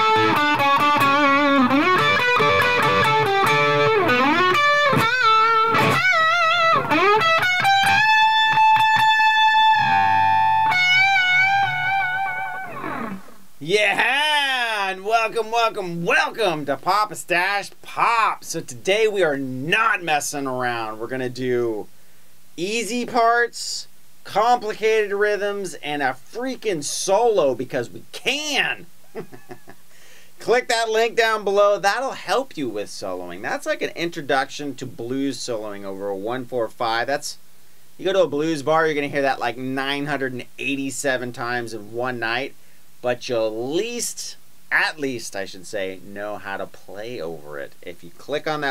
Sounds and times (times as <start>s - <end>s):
Speech: 13.6s - 21.9s, 22.6s - 28.9s, 30.4s - 37.4s, 38.0s - 48.7s.